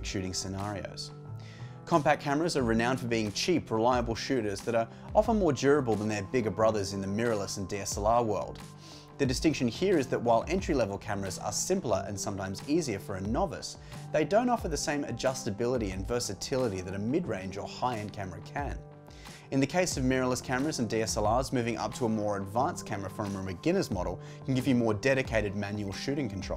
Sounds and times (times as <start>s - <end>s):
Speech: 0.0s - 1.1s, 1.9s - 8.6s, 9.2s - 18.8s, 19.5s - 26.5s.